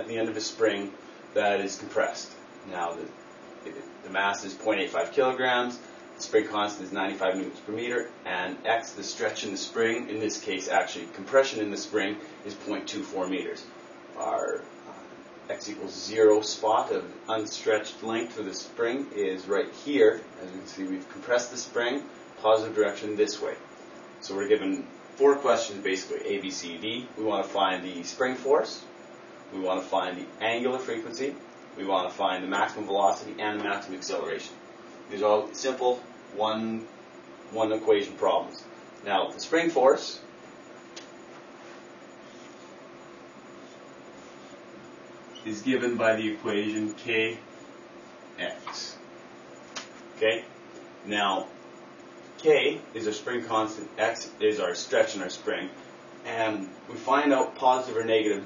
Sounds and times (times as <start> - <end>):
Speech: 0.0 - 23.6, 24.2 - 28.9, 29.5 - 36.9, 37.5 - 40.3, 45.4 - 47.5, 48.4 - 49.0, 50.2 - 51.6, 52.4 - 58.4.